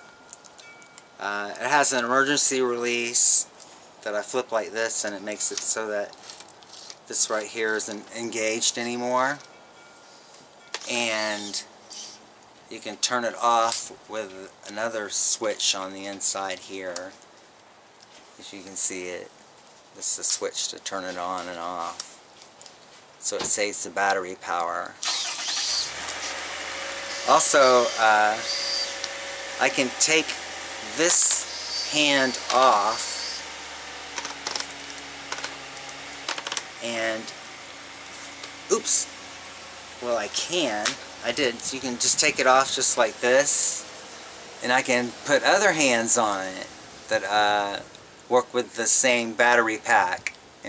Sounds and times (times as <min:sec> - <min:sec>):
Speech: 0:01.2 - 0:06.1, 0:07.1 - 0:09.4, 0:10.9 - 0:11.7, 0:12.7 - 0:17.2, 0:18.4 - 0:19.3, 0:20.0 - 0:22.2, 0:23.2 - 0:25.0, 0:27.3 - 0:28.4, 0:29.6 - 0:33.2, 0:36.8 - 0:37.4, 0:38.7 - 0:39.1, 0:40.0 - 0:43.8, 0:44.6 - 0:50.6.